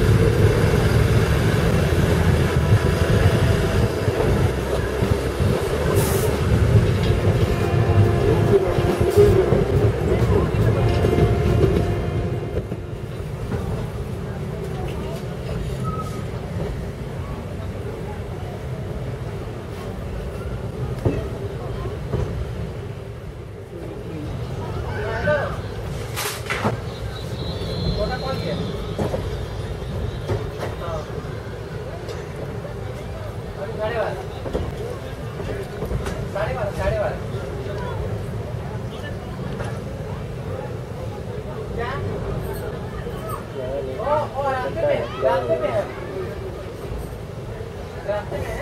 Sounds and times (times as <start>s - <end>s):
Train: 0.0s - 48.6s.